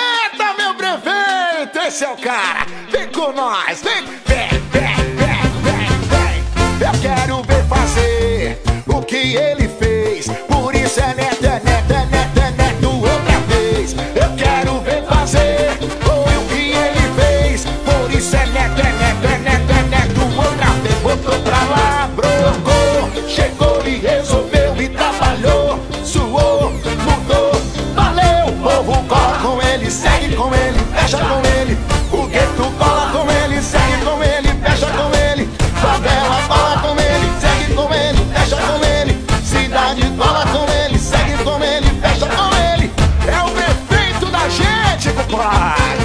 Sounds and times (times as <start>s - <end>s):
Music: 0.0s - 46.0s.